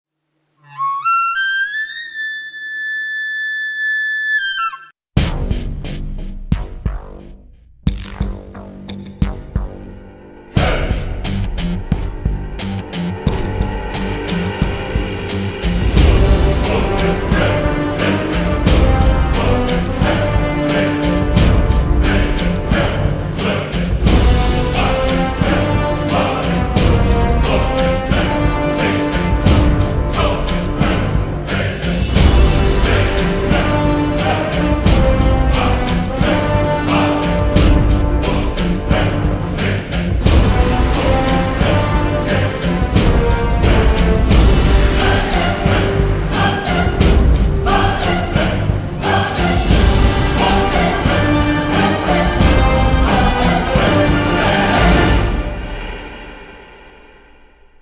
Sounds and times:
Shofar: 0.6s - 4.9s
Wind instrument, woodwind instrument: 0.6s - 5.0s.

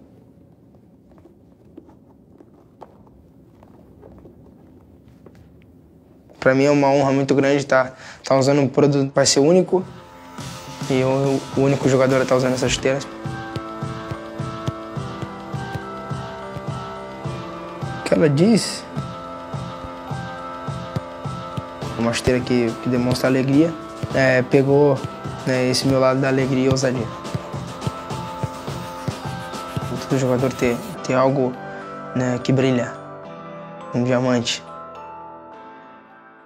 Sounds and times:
Speech: 6.4s - 9.9s, 10.9s - 13.1s, 18.0s - 18.9s, 22.0s - 27.2s, 29.9s - 31.6s, 32.2s - 33.0s, 33.9s - 34.7s
Music: 8.8s - 36.4s.

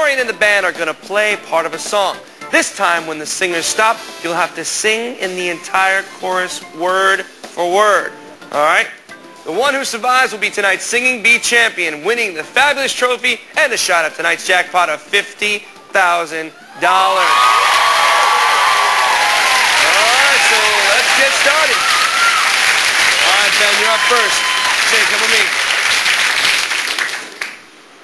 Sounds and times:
Music: 0.0s - 25.8s
Speech: 9.5s - 17.2s.

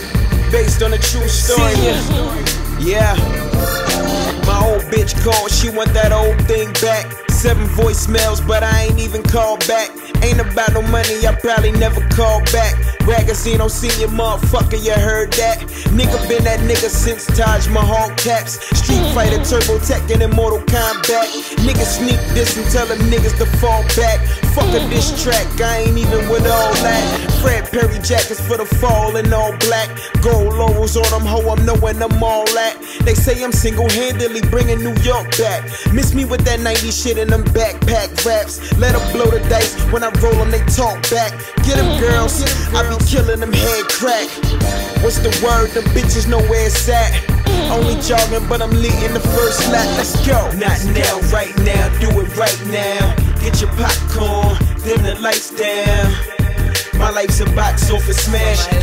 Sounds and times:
Music: 0.0s - 58.8s.

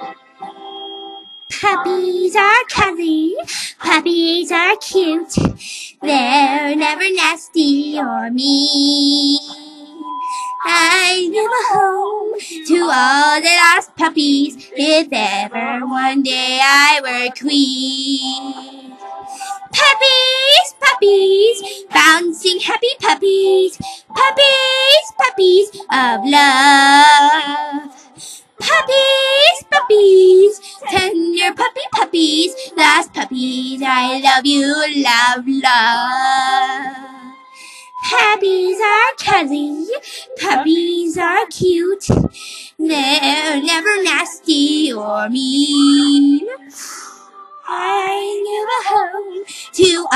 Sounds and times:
Speech: 38.0s - 42.2s, 45.5s - 46.7s.

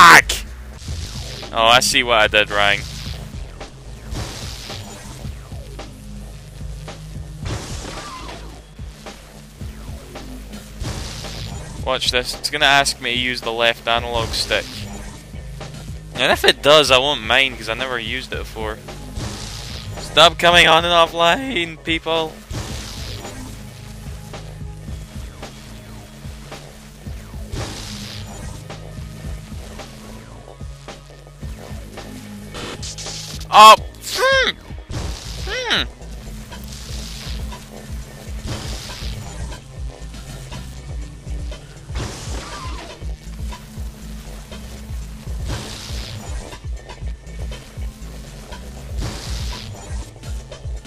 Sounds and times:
Music: 0.0s - 50.8s.

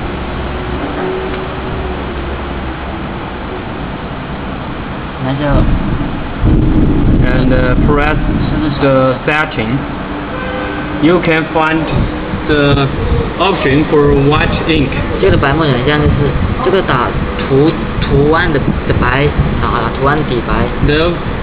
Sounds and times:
Speech: 5.2s - 5.7s, 7.2s - 9.8s, 11.0s - 21.2s.

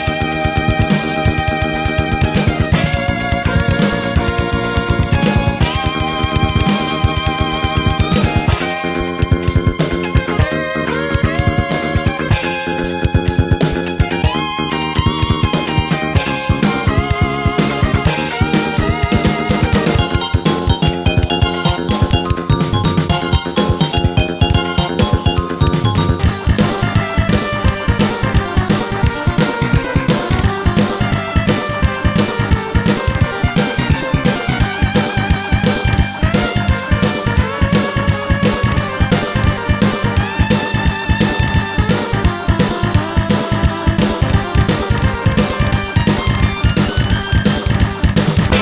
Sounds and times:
Drum: 0.0s - 48.6s
Drum kit: 0.0s - 48.6s.

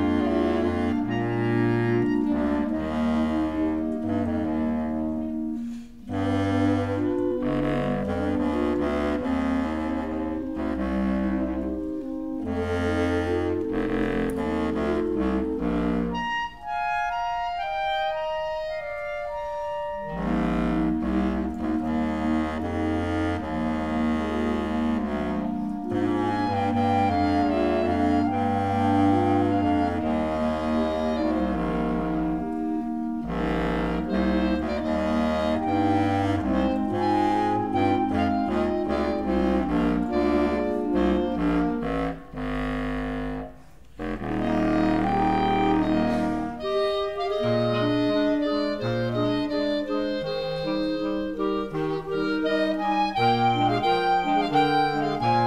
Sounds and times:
Brass instrument: 0.0s - 55.4s
Clarinet: 0.0s - 55.4s.

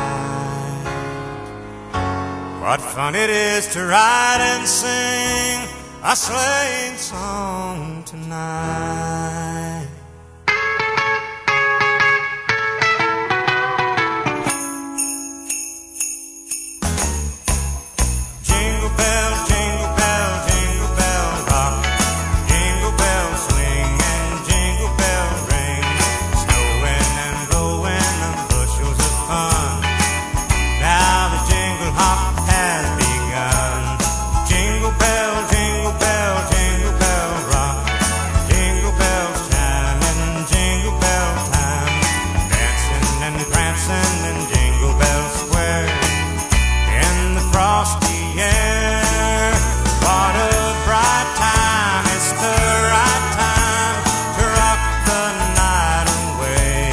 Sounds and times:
Jingle bell: 14.4s - 56.9s.

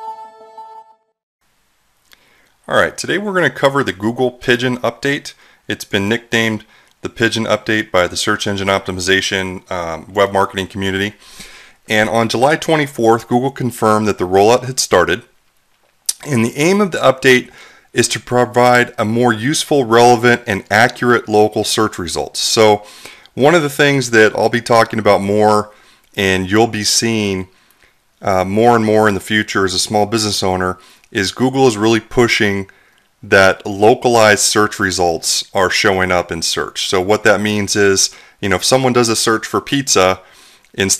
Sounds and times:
Speech: 2.7s - 11.2s, 11.9s - 15.3s, 16.1s - 27.6s, 28.2s - 40.9s.

